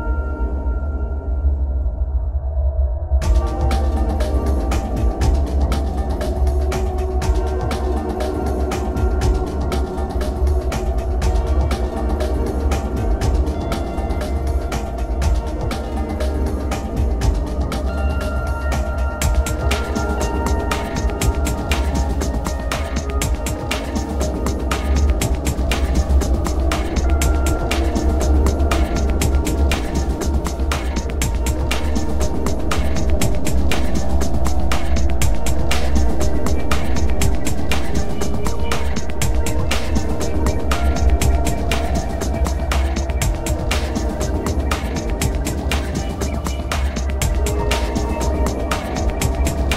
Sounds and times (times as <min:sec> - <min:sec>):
Music: 0:00.0 - 0:49.7.